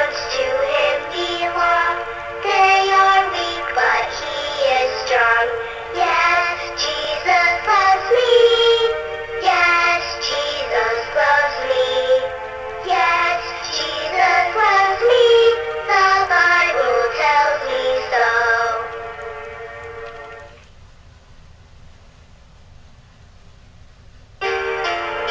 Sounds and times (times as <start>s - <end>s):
Synthetic singing: 0.0s - 12.3s, 12.9s - 18.9s
Child singing: 0.0s - 18.9s
Music: 0.0s - 20.6s, 24.4s - 25.3s.